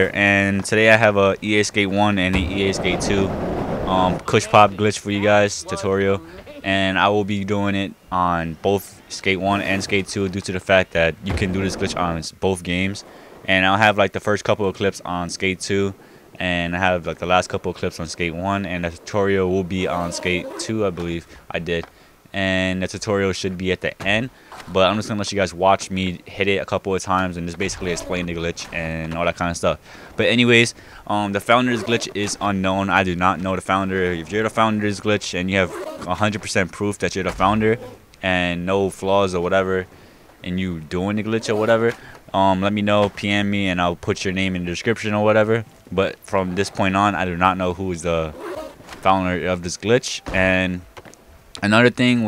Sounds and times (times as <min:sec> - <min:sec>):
Speech: 0:00.0 - 0:03.3, 0:03.9 - 0:48.4, 0:49.0 - 0:50.8, 0:51.6 - 0:52.2.